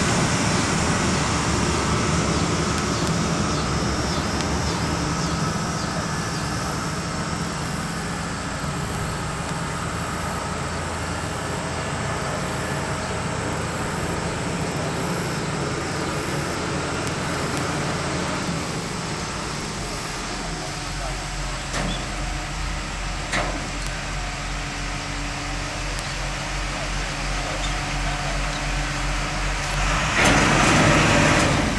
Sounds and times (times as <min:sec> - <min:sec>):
Motorboat, speedboat: 0:00.0 - 0:31.7.